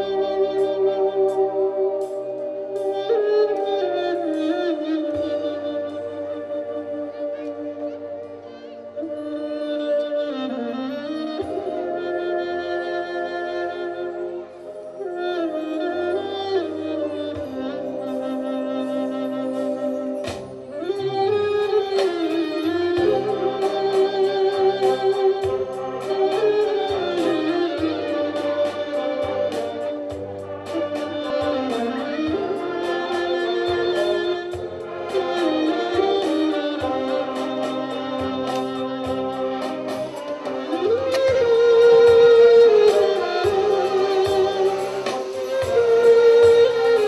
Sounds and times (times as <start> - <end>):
Orchestra: 0.0 - 47.0
Soul music: 0.0 - 47.0.